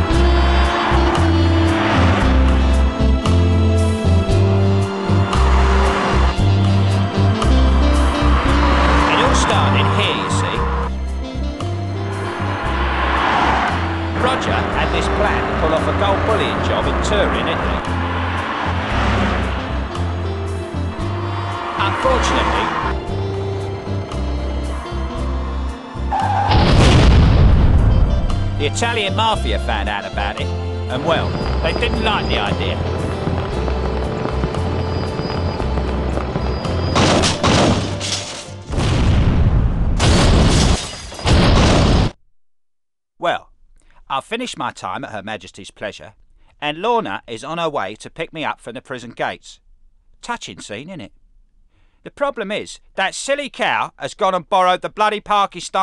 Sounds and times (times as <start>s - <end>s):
Music: 0.0s - 38.8s
Speech: 9.1s - 10.6s, 28.6s - 32.8s, 43.2s - 43.5s, 44.1s - 49.6s, 50.2s - 51.1s, 52.1s - 55.8s.